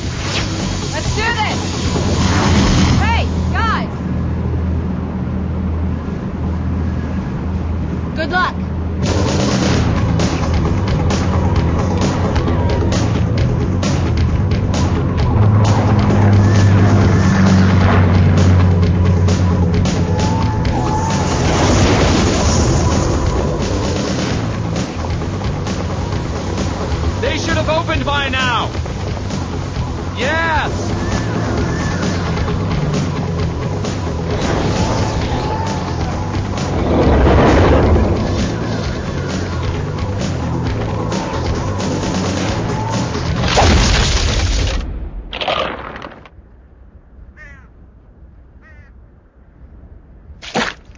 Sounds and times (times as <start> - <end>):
Music: 0.0 - 4.8, 8.2 - 44.3.